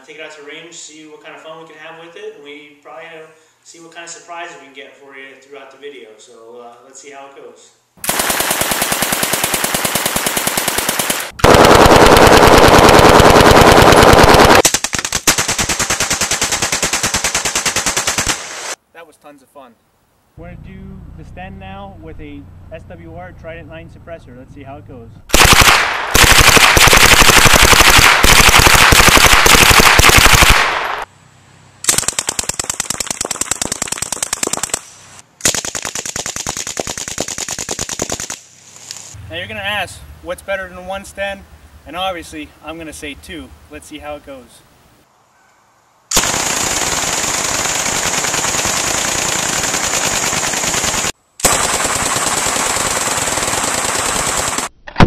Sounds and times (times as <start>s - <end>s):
Speech: 0.0s - 7.8s, 18.9s - 19.8s, 20.4s - 25.2s, 39.2s - 44.7s
Outside, rural or natural: 7.9s - 55.0s.